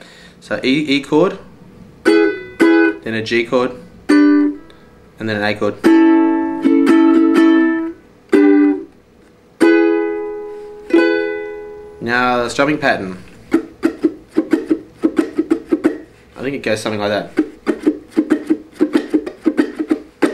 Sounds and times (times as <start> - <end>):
Ukulele: 2.1 - 3.0, 4.1 - 4.6, 5.8 - 8.9, 9.6 - 12.0, 13.5 - 16.2, 17.3 - 20.3.